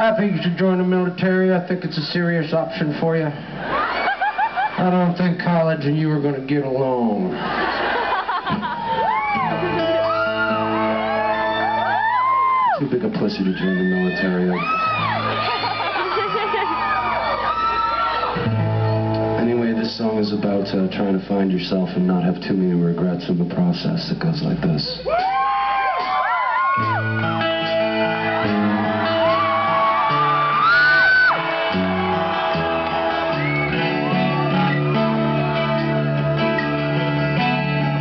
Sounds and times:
Male speech, man speaking: 0.0s - 3.4s, 4.8s - 7.3s, 12.8s - 14.7s, 19.4s - 25.1s
Music: 8.5s - 21.6s, 25.2s - 38.0s.

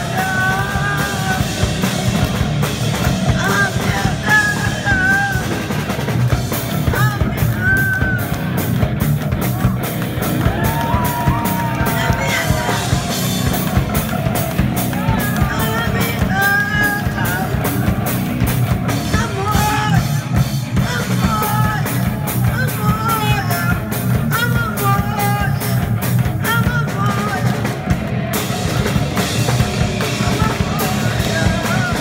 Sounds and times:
Music: 0.0s - 32.0s.

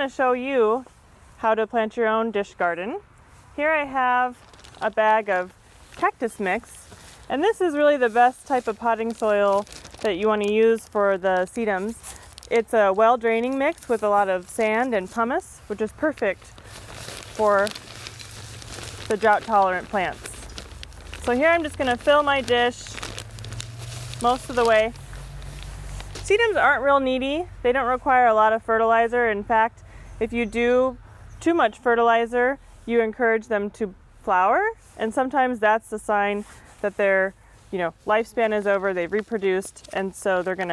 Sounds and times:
Speech: 0.0s - 3.0s, 3.6s - 16.4s, 19.1s - 20.4s, 21.2s - 23.0s, 24.2s - 25.0s, 26.3s - 40.7s
Outside, rural or natural: 0.0s - 40.7s.

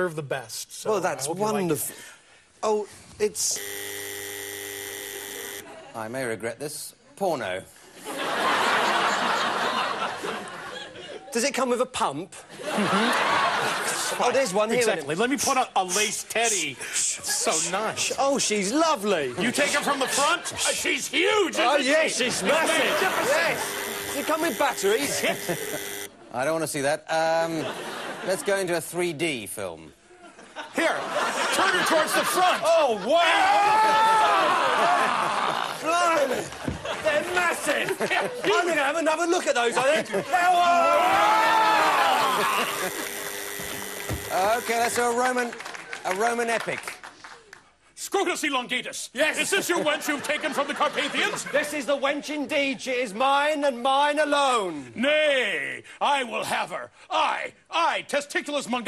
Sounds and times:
Speech: 11.3s - 12.5s, 13.8s - 23.6s, 26.3s - 27.7s, 28.3s - 30.0s, 35.8s - 41.1s, 44.3s - 47.0s, 48.0s - 58.8s.

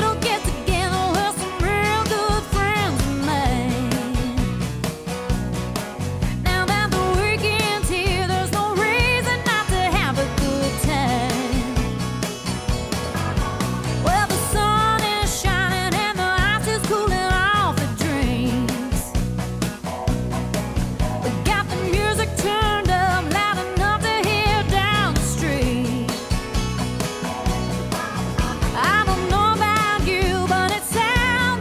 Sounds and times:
Music: 0.0s - 31.6s.

